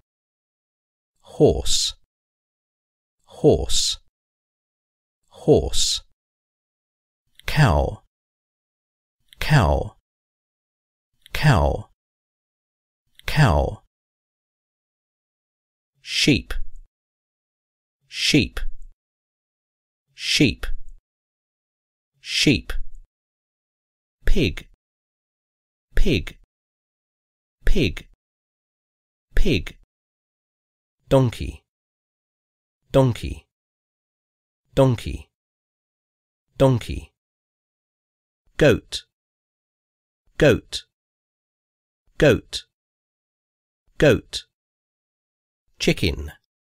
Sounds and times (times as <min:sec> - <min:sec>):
Speech: 0:01.2 - 0:02.1, 0:03.3 - 0:04.1, 0:05.3 - 0:06.2, 0:07.4 - 0:08.1, 0:09.4 - 0:10.0, 0:11.3 - 0:12.0, 0:13.2 - 0:13.9, 0:16.0 - 0:16.6, 0:18.1 - 0:18.7, 0:20.2 - 0:20.8, 0:22.2 - 0:22.8, 0:24.3 - 0:24.8, 0:26.0 - 0:26.5, 0:27.7 - 0:28.2, 0:29.4 - 0:29.9, 0:31.1 - 0:31.7, 0:32.9 - 0:33.5, 0:34.7 - 0:35.4, 0:36.6 - 0:37.2, 0:38.6 - 0:39.2, 0:40.4 - 0:41.0, 0:42.2 - 0:42.8, 0:44.0 - 0:44.6, 0:45.8 - 0:46.5.